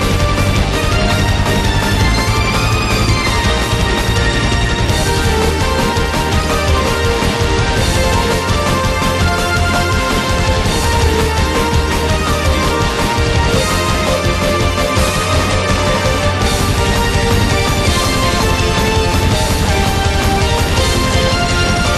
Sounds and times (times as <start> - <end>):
Music: 0.0 - 21.9.